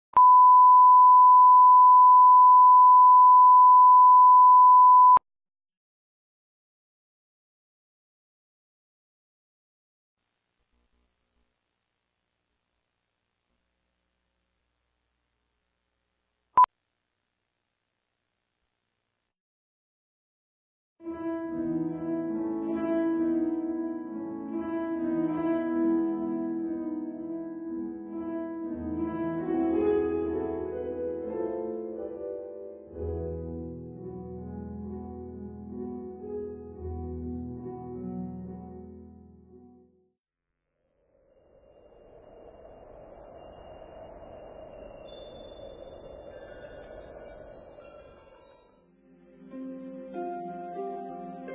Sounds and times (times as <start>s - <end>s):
Beep, bleep: 0.2s - 5.2s.